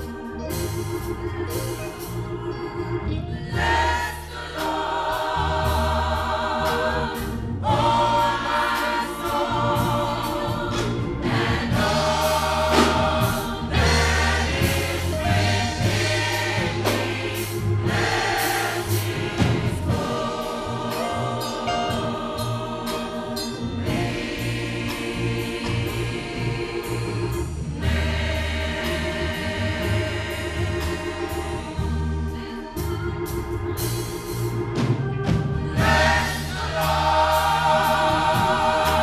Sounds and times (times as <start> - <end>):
Choir: 3.4 - 33.4, 35.3 - 39.0.